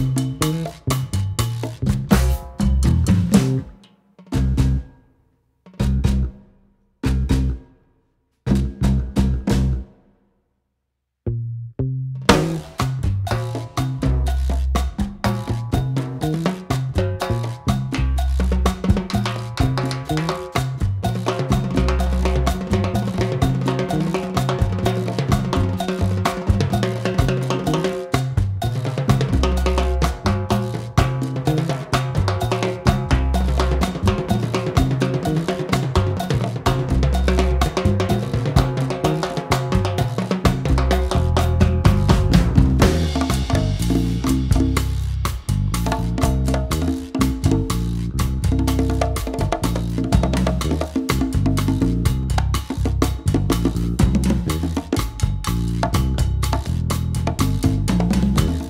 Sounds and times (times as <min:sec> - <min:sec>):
Music: 0:00.0 - 0:10.3, 0:11.3 - 0:58.6.